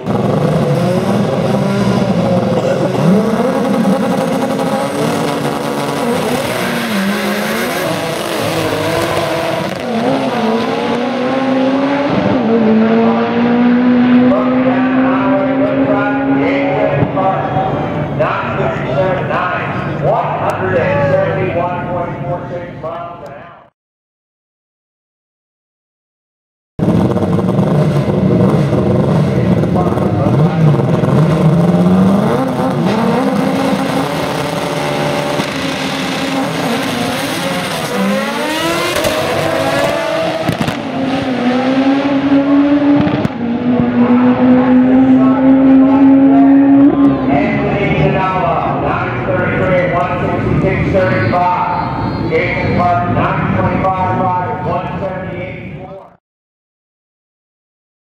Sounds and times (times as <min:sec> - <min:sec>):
Race car, auto racing: 0:00.0 - 0:23.7, 0:26.8 - 0:56.2.